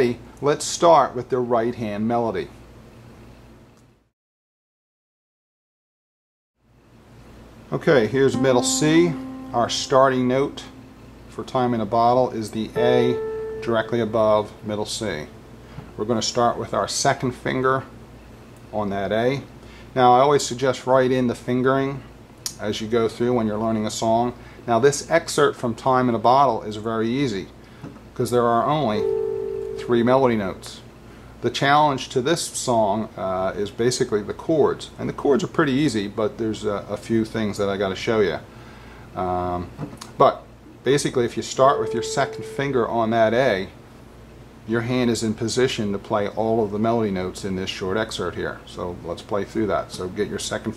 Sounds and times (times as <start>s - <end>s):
Speech: 0.0s - 2.6s, 7.7s - 15.4s, 16.0s - 18.0s, 18.7s - 27.6s, 28.2s - 29.2s, 29.8s - 38.5s, 39.2s - 43.8s, 44.6s - 50.7s
Inside, small room: 6.6s - 50.7s
Piano: 8.3s - 11.2s, 12.8s - 14.7s, 41.7s - 42.7s.